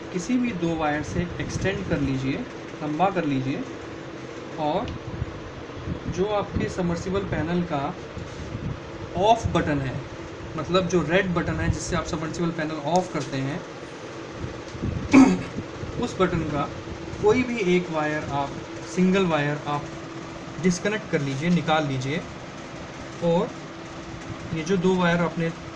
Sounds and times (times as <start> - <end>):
Speech: 0.1 - 3.7, 4.6 - 5.0, 6.1 - 8.0, 9.2 - 13.6, 16.0 - 19.9, 20.6 - 22.3, 23.2 - 23.6, 24.5 - 25.6.